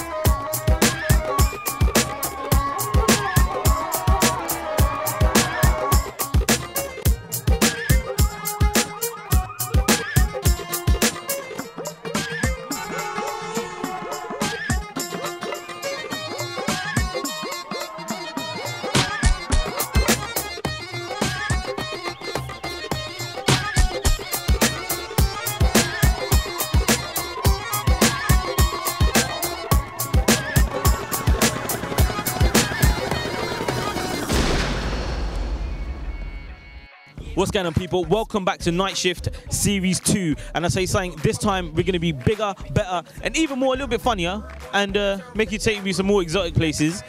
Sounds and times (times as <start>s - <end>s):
Music: 0.0s - 47.0s.